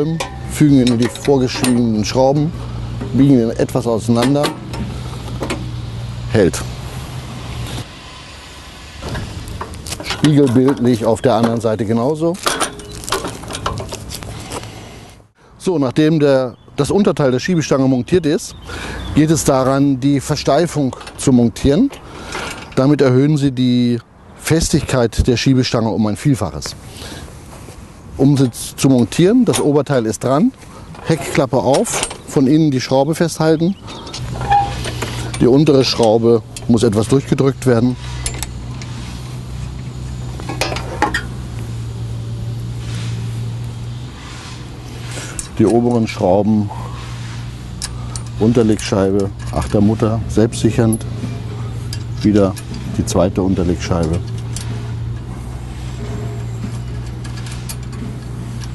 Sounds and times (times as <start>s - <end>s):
Speech: 0.0s - 4.6s, 6.3s - 6.7s, 10.2s - 12.5s, 15.6s - 18.6s, 19.2s - 21.9s, 22.8s - 26.8s, 28.2s - 33.8s, 35.4s - 38.0s, 45.5s - 46.8s, 48.4s - 51.0s, 52.2s - 54.3s.